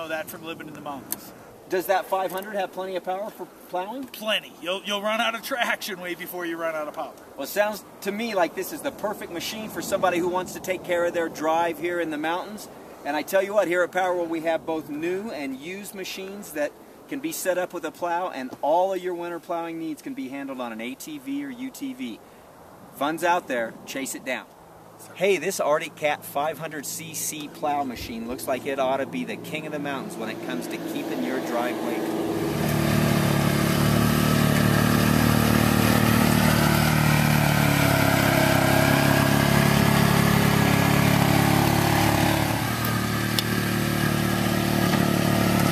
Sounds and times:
Speech: 0.0s - 22.2s, 23.0s - 32.1s.

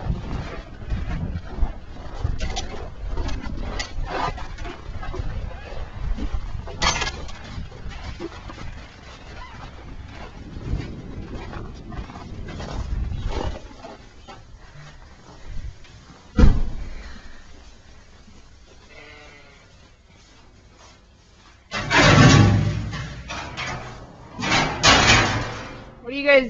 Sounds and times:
Bleat: 18.9s - 19.7s.

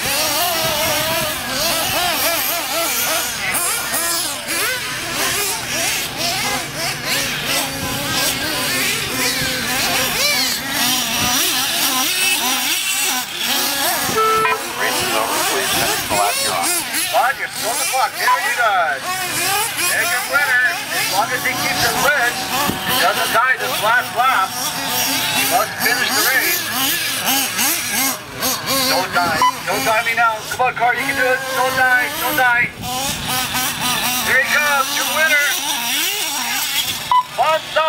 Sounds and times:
Speech: 14.4s - 24.6s, 25.4s - 26.7s, 28.8s - 32.8s, 34.2s - 35.7s, 37.4s - 37.8s.

